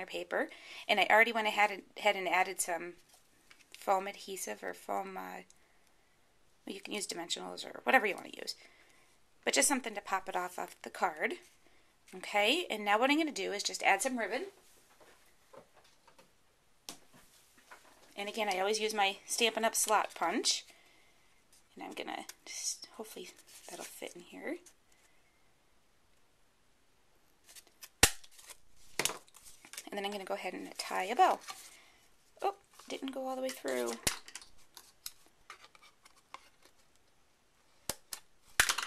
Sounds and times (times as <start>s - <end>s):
Inside, small room: 0.0s - 38.8s
Speech: 6.7s - 8.6s, 9.5s - 11.4s, 12.1s - 14.6s, 18.2s - 20.6s, 21.8s - 24.7s, 29.9s - 31.4s, 32.4s - 34.0s.